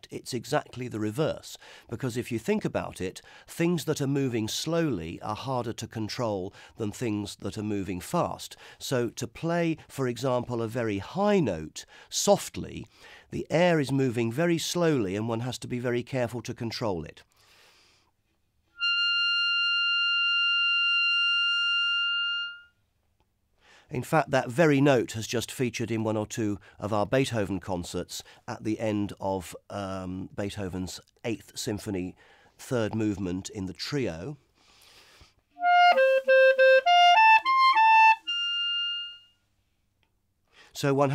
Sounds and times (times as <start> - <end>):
Speech: 0.0 - 17.3, 23.9 - 34.4, 40.8 - 41.1
Clarinet: 18.7 - 22.8, 35.5 - 39.4.